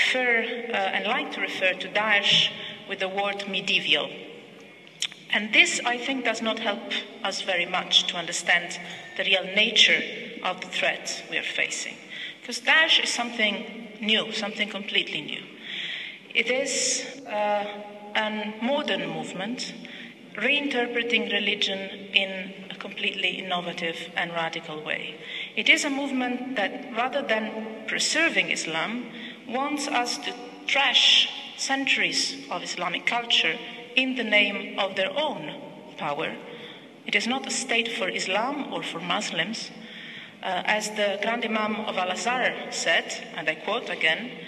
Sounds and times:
Female speech, woman speaking: 0.0s - 4.2s, 5.1s - 15.5s, 16.4s - 19.8s, 20.4s - 36.4s, 37.1s - 39.8s, 40.4s - 44.4s
Narration, monologue: 0.0s - 44.4s.

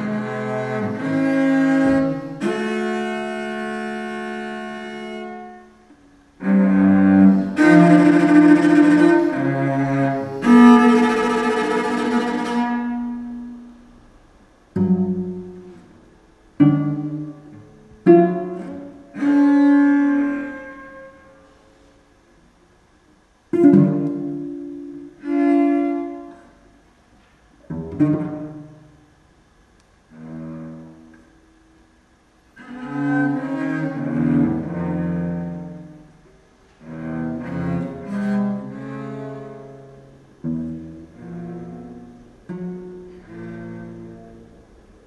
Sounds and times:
Classical music: 0.0s - 13.9s, 14.7s - 21.3s, 23.5s - 26.7s, 32.6s - 45.0s
Cello: 0.0s - 45.0s.

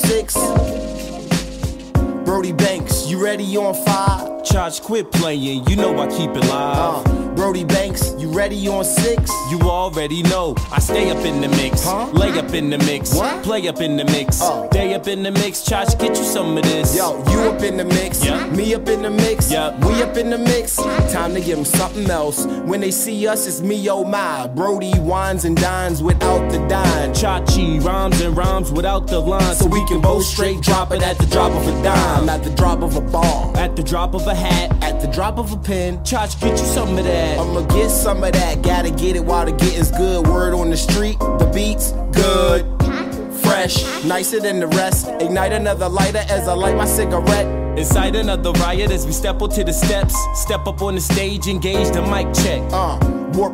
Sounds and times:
Music: 0.0s - 53.5s.

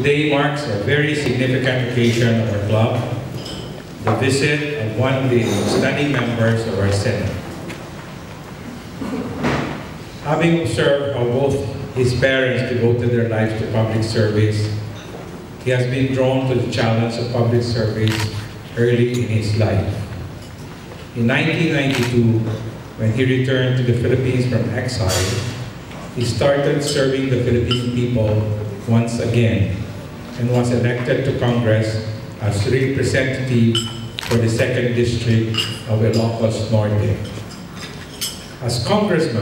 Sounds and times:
Male speech, man speaking: 0.0s - 3.2s, 4.1s - 7.4s, 10.2s - 14.8s, 15.7s - 20.1s, 21.2s - 25.5s, 26.2s - 37.3s, 38.6s - 39.4s
Narration, monologue: 0.0s - 39.4s.

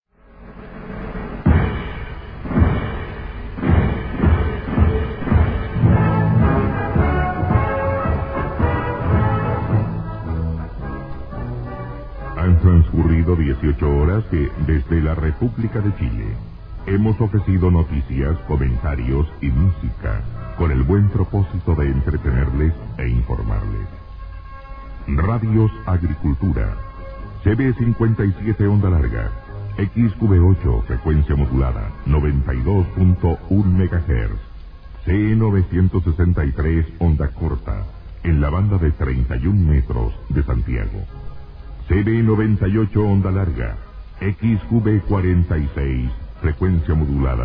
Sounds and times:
Music: 0.0s - 47.4s
Speech: 12.4s - 24.0s, 25.1s - 26.8s, 27.4s - 41.1s, 41.8s - 47.4s.

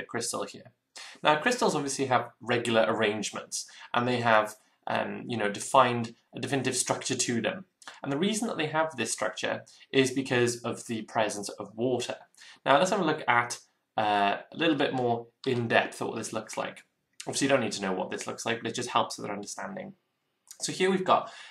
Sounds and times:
Speech: 0.0s - 21.5s.

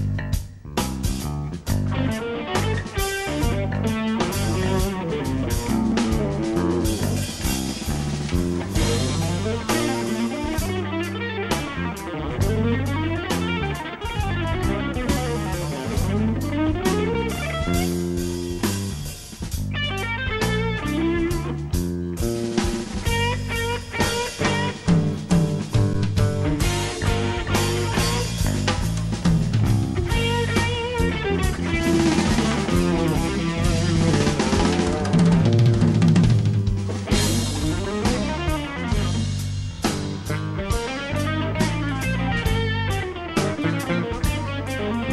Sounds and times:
Guitar: 0.0s - 45.1s.

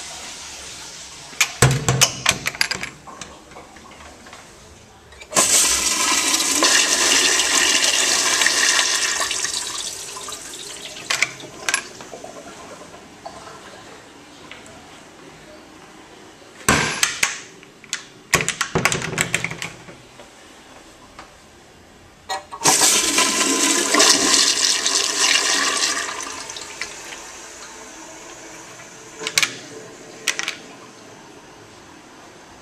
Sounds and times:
Toilet flush: 0.0s - 1.6s, 5.3s - 13.9s, 22.6s - 31.7s.

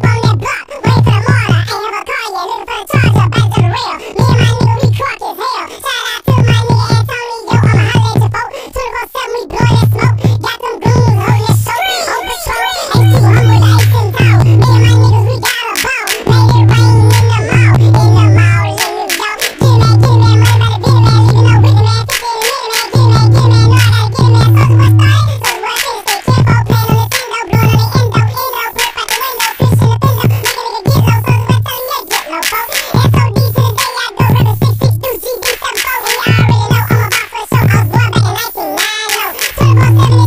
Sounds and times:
Music: 0.0s - 5.1s, 5.9s - 8.4s, 9.4s - 40.2s.

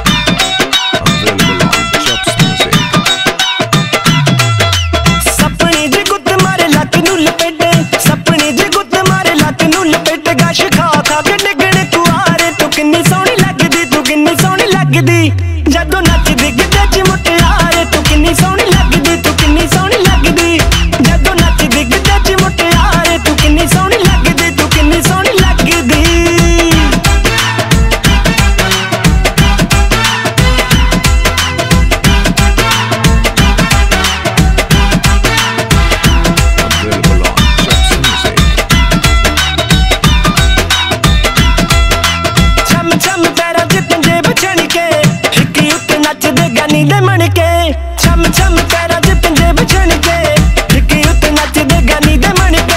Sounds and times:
Music: 0.0s - 52.7s.

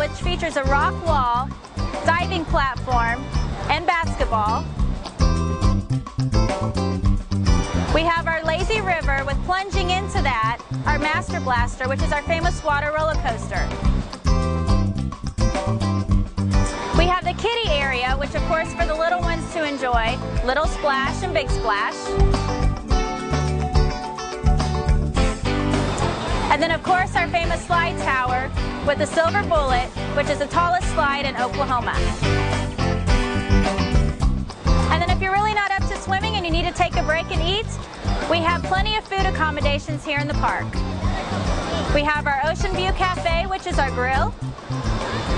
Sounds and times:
Speech: 0.0s - 4.6s, 7.9s - 13.7s, 17.0s - 22.1s, 26.5s - 32.1s, 34.9s - 40.8s, 41.9s - 44.3s
Music: 0.0s - 45.3s.

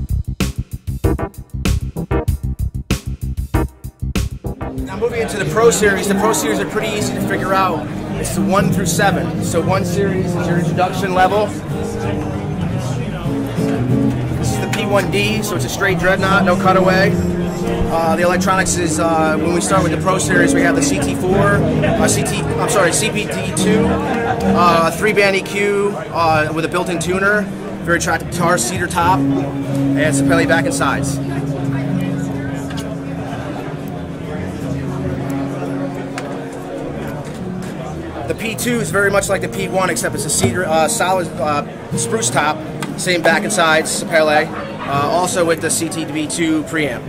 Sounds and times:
Strum: 3.6s - 25.8s, 27.6s - 44.0s
Speech: 4.8s - 13.8s, 14.4s - 47.0s.

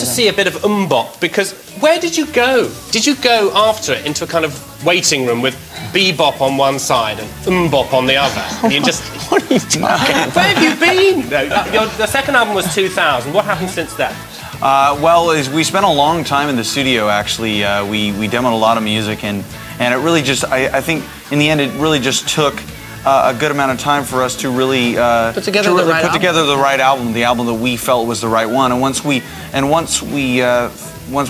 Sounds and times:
Music: 0.0s - 31.2s
Speech: 0.0s - 31.2s.

